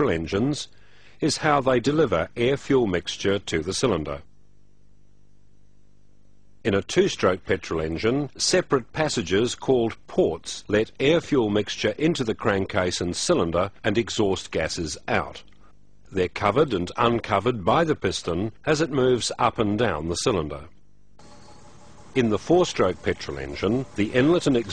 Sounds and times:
Speech: 0.0s - 4.3s, 6.7s - 15.5s, 16.1s - 20.8s, 22.2s - 24.7s.

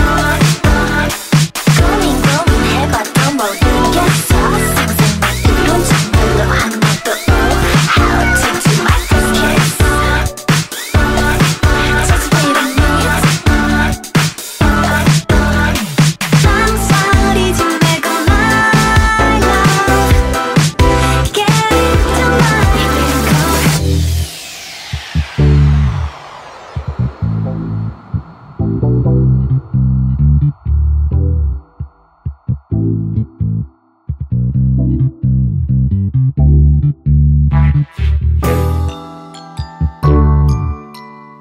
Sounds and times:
Synthesizer: 0.0s - 35.5s, 36.5s - 41.4s.

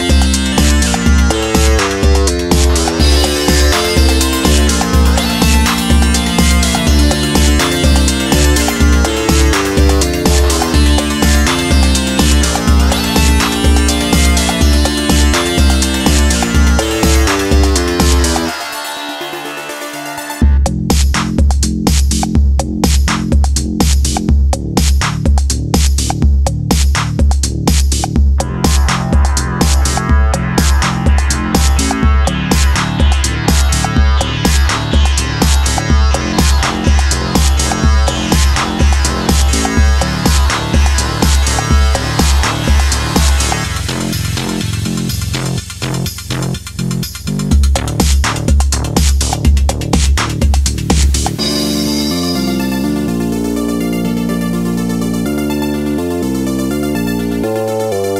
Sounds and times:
Electronica: 0.0s - 58.1s.

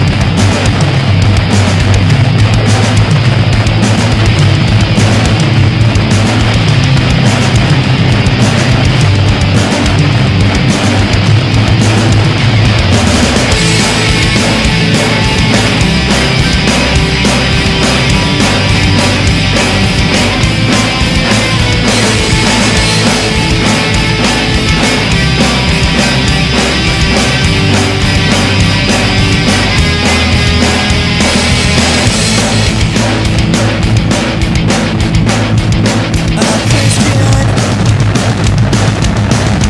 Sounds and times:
Drum: 0.0s - 39.6s
Drum kit: 0.0s - 39.6s.

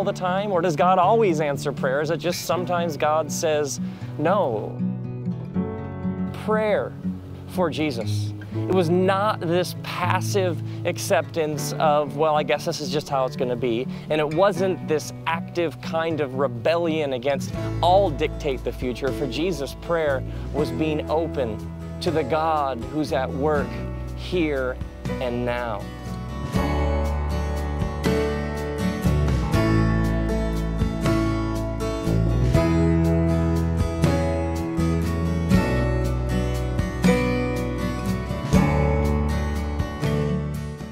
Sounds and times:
Speech: 0.0s - 4.7s, 6.4s - 6.9s, 7.5s - 25.9s
Music: 0.0s - 40.9s.

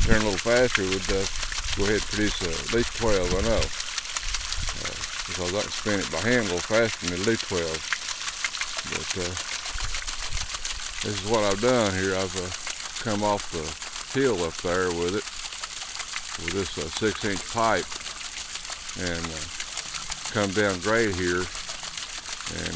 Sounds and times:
Speech: 0.0s - 3.7s, 4.8s - 7.8s, 8.8s - 9.4s, 11.0s - 15.2s, 16.4s - 17.9s, 19.0s - 19.5s, 20.3s - 21.5s, 22.5s - 22.7s.

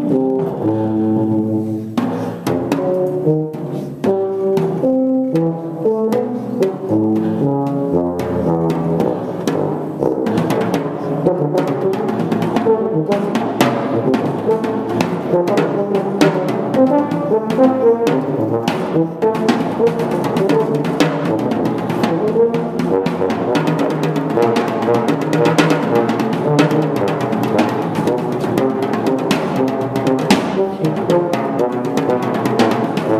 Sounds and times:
Brass instrument: 0.0s - 33.2s
Drum: 0.0s - 33.2s
Drum kit: 0.0s - 33.2s.

